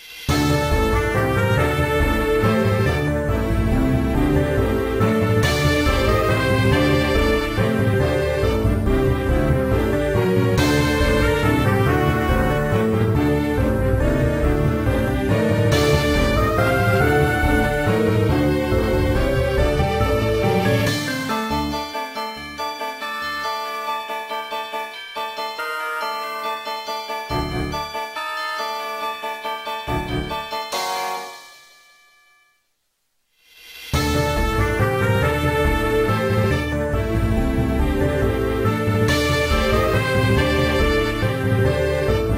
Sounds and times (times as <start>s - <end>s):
Music: 0.0s - 42.3s.